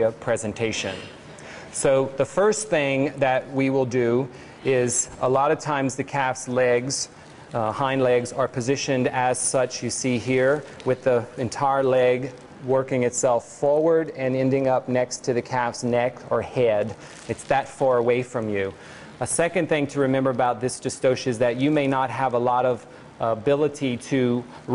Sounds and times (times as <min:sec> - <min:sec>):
Speech: 0:00.0 - 0:24.7.